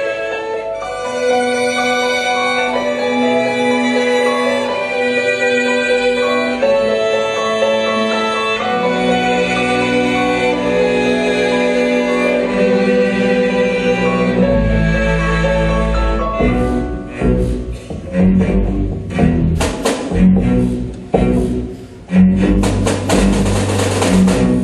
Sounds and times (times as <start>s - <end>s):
Sad music: 0.0s - 24.6s.